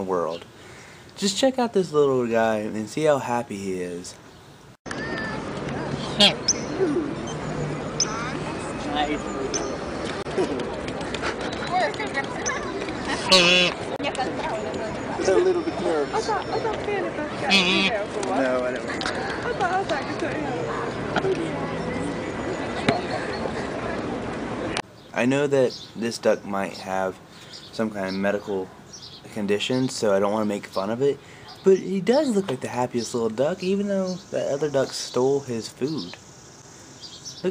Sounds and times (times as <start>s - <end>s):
Quack: 13.2s - 13.8s, 17.5s - 18.0s.